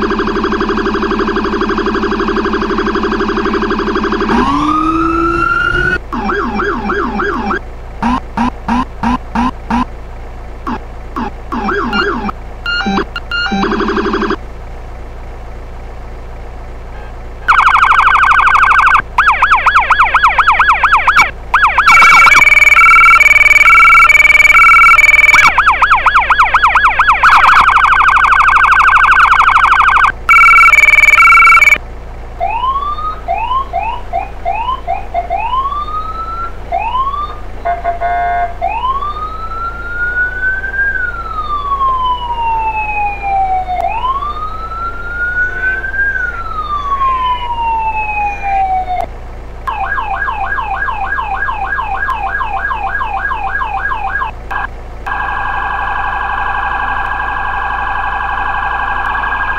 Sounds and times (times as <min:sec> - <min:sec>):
Siren: 0:00.0 - 0:09.9, 0:10.7 - 0:14.4, 0:17.5 - 0:31.8, 0:32.4 - 0:37.5, 0:38.6 - 0:49.1, 0:49.7 - 0:59.5
Vehicle: 0:00.0 - 0:59.5.